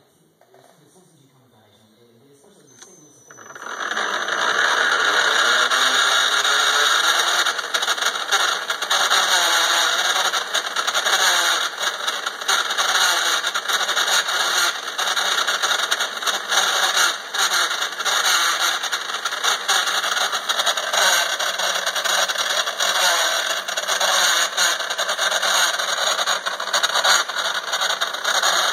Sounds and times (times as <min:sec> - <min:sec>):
Engine: 0:02.5 - 0:28.7.